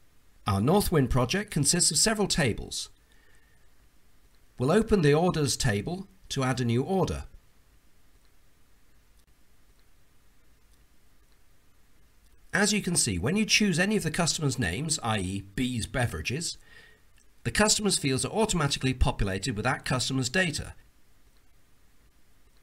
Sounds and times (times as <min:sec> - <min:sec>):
Speech: 0:00.5 - 0:03.0, 0:04.6 - 0:07.4, 0:12.5 - 0:16.6, 0:17.4 - 0:20.8.